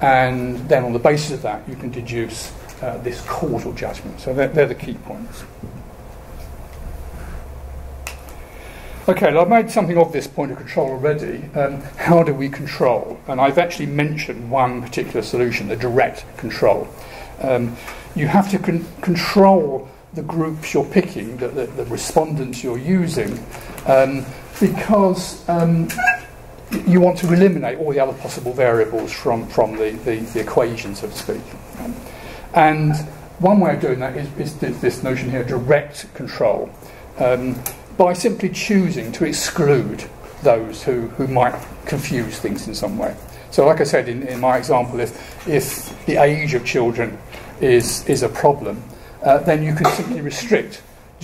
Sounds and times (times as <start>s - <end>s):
Speech: 0.0s - 5.5s, 9.1s - 31.6s, 32.5s - 51.2s.